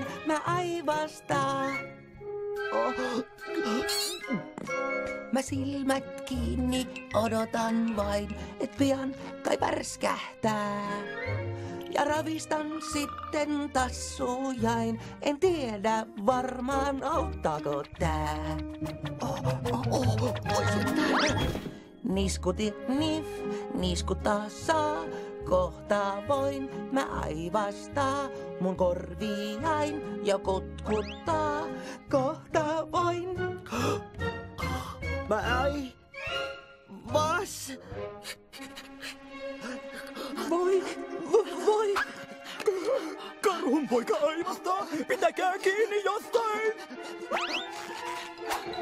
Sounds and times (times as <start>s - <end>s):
Music: 0.0s - 48.8s.